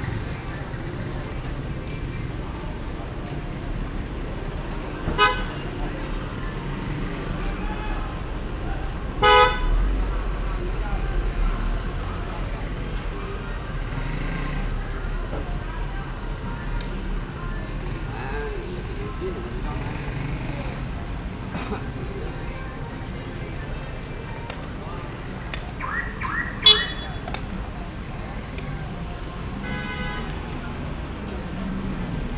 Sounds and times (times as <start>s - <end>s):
Speech: 0.0s - 32.3s.